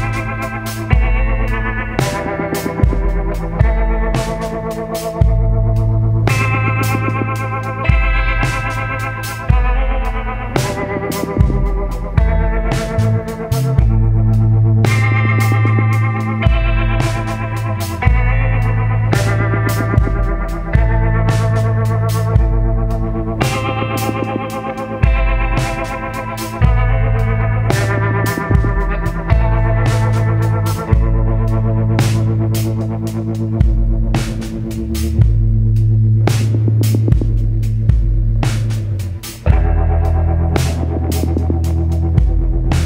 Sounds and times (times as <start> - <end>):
Music: 0.0 - 42.8.